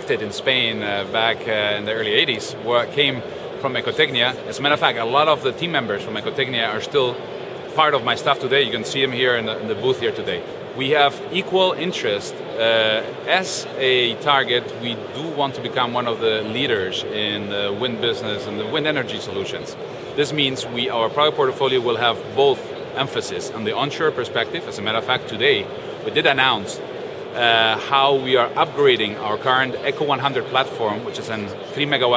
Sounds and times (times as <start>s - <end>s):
Speech: 0.0s - 32.1s.